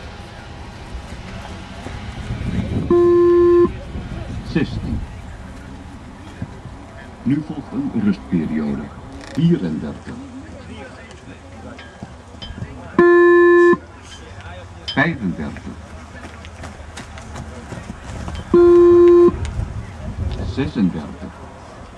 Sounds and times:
Run: 0.0s - 2.8s, 4.0s - 7.2s, 10.5s - 12.9s, 15.2s - 20.5s
Speech: 3.6s - 13.0s, 19.7s - 21.9s.

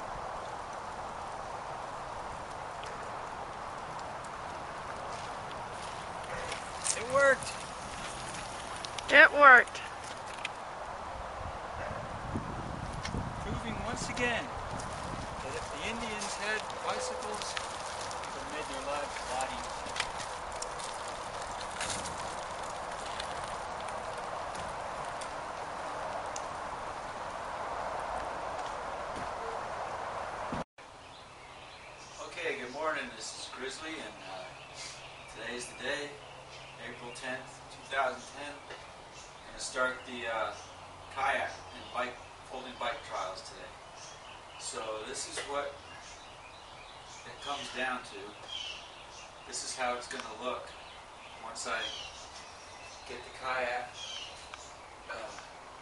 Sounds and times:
Vehicle: 0.0s - 55.8s.

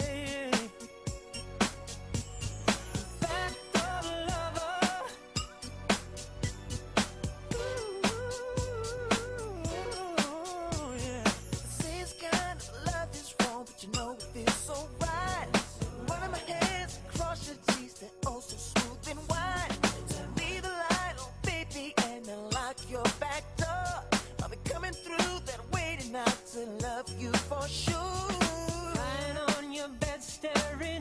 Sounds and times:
Music: 0.0s - 31.0s.

